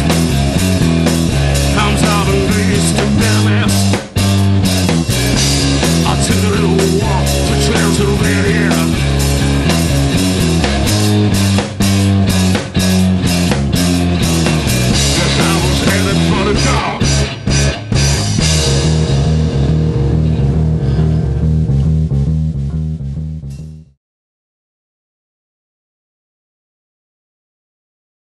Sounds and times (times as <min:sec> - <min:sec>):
Punk rock: 0:00.0 - 0:23.0
Blues: 0:00.0 - 0:23.9
Drum: 0:00.0 - 0:23.9.